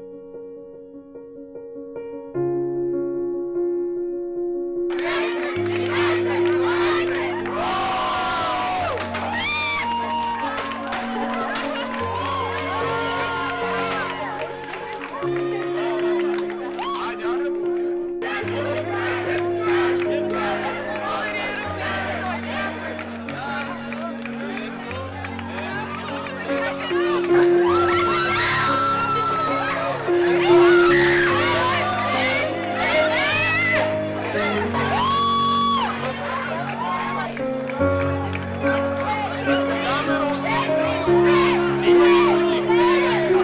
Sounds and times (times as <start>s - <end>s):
Music: 0.0s - 43.4s.